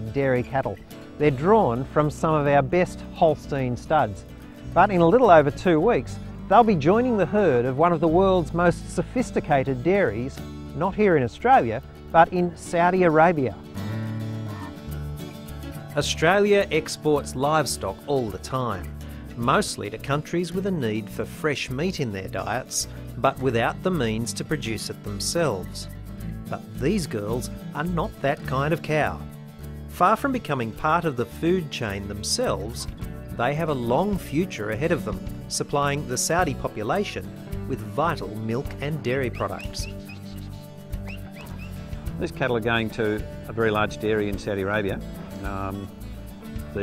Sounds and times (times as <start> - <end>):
Speech: 0.0 - 13.6, 16.0 - 25.9, 26.5 - 29.3, 30.0 - 39.9, 42.2 - 45.9
Music: 0.0 - 46.8.